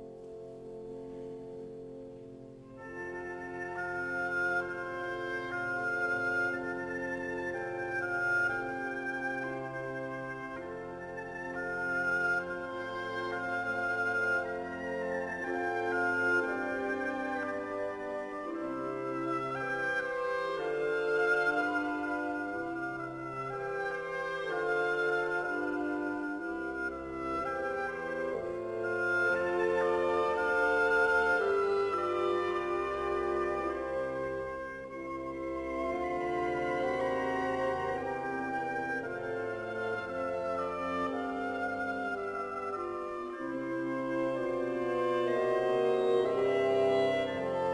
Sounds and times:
Violin, fiddle: 0:02.7 - 0:47.7.

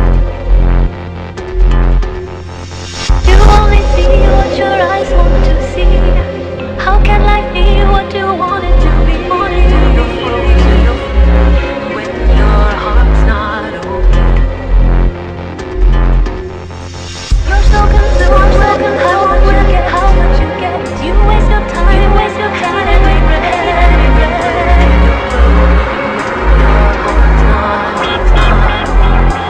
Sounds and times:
Dubstep: 0:00.0 - 0:29.4.

